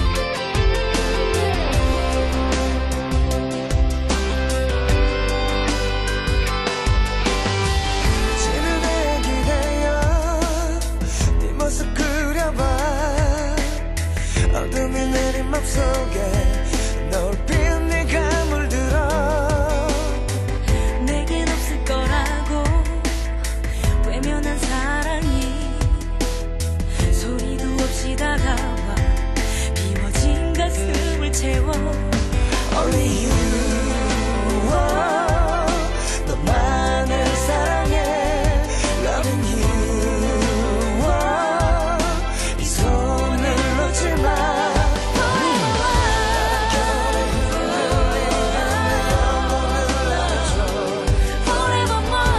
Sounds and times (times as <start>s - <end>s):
Tender music: 0.0s - 52.3s.